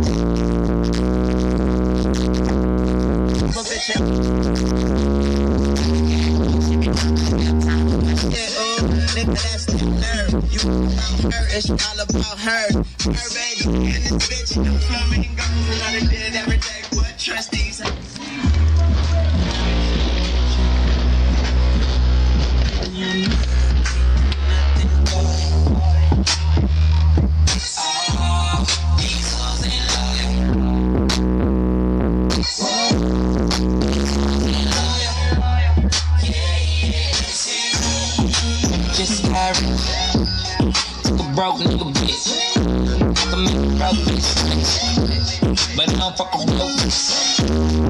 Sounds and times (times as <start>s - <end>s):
Music: 0.0s - 47.9s.